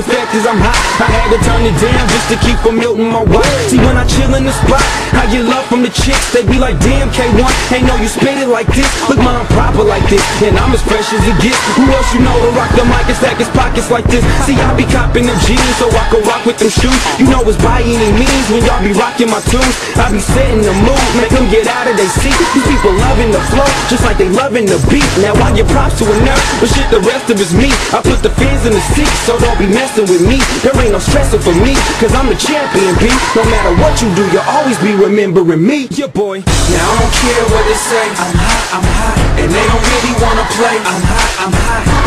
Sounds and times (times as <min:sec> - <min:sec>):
Music: 0:00.0 - 0:42.0.